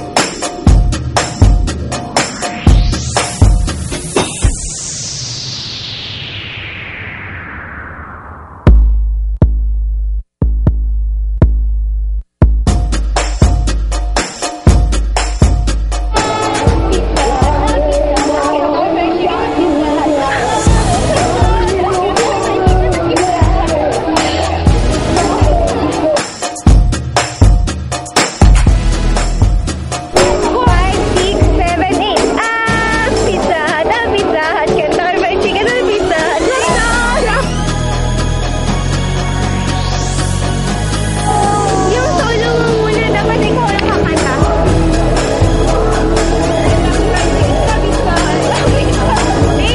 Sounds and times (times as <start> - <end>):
Music: 0.0 - 5.2, 8.7 - 49.7
Speech: 17.2 - 26.1, 30.3 - 37.5, 41.4 - 44.7, 46.7 - 49.7.